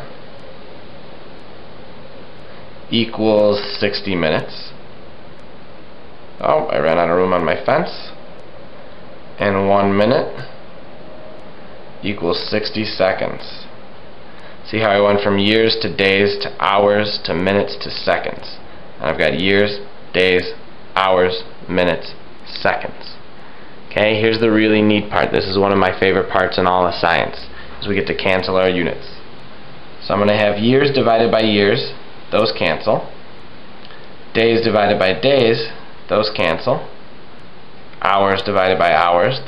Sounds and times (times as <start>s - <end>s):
Speech: 2.9s - 4.8s, 6.4s - 8.2s, 9.4s - 10.6s, 12.0s - 13.8s, 14.6s - 23.2s, 23.9s - 29.3s, 30.0s - 33.2s, 34.3s - 37.0s, 38.0s - 39.4s.